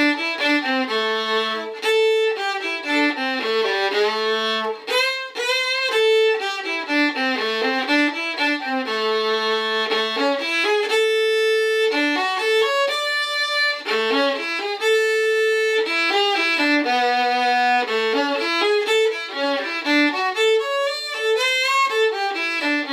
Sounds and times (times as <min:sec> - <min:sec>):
Violin, fiddle: 0:00.0 - 0:22.9.